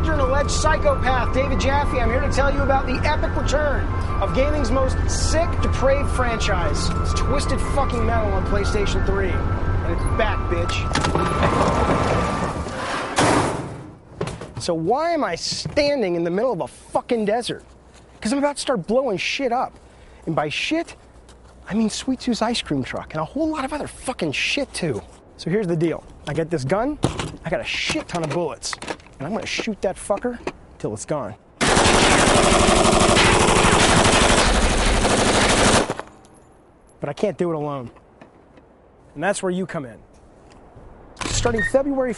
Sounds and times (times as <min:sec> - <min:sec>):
Speech: 0:00.0 - 0:10.9, 0:14.6 - 0:17.6, 0:18.2 - 0:19.7, 0:20.3 - 0:21.0, 0:21.7 - 0:31.4, 0:37.0 - 0:38.0, 0:39.2 - 0:40.0, 0:41.3 - 0:42.1.